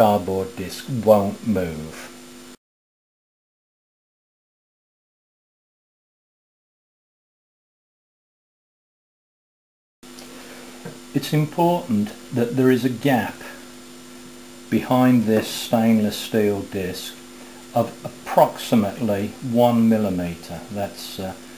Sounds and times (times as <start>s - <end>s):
Speech: 0.0s - 2.2s, 11.1s - 13.6s, 14.7s - 21.4s.